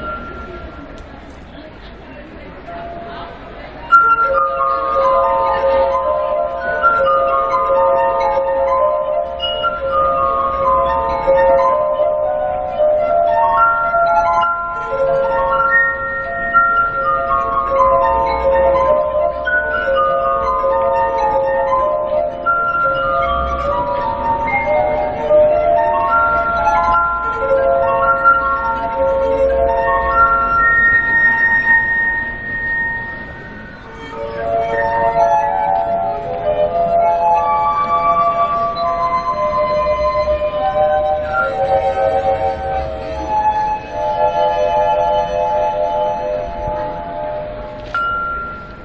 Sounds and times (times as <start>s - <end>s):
Music: 0.0s - 48.8s.